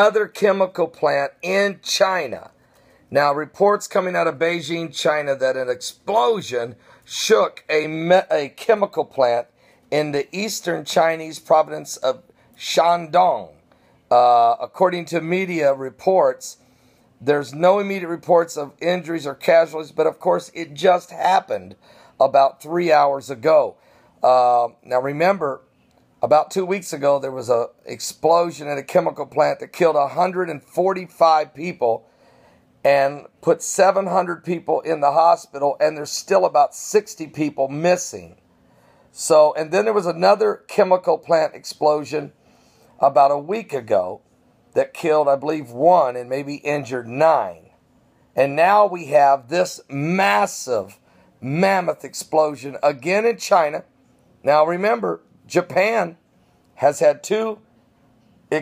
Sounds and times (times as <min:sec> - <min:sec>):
Speech: 0:00.0 - 0:02.5, 0:03.1 - 0:16.6, 0:17.2 - 0:32.0, 0:32.8 - 0:38.4, 0:39.2 - 0:42.3, 0:43.0 - 0:44.2, 0:44.8 - 0:47.7, 0:48.4 - 0:56.2, 0:56.8 - 0:57.6.